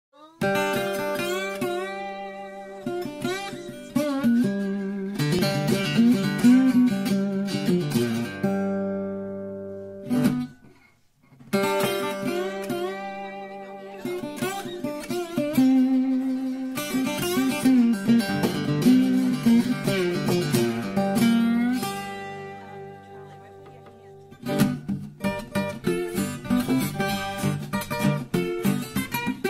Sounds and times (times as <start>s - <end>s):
Acoustic guitar: 0.2s - 29.4s.